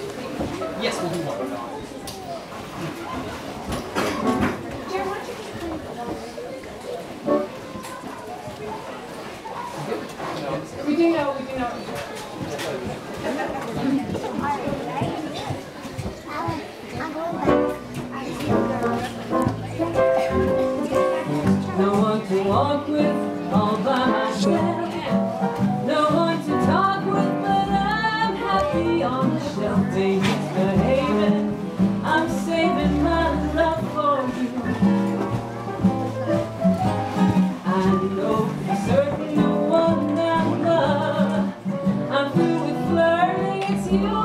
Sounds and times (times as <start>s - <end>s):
Speech: 0.0s - 36.5s.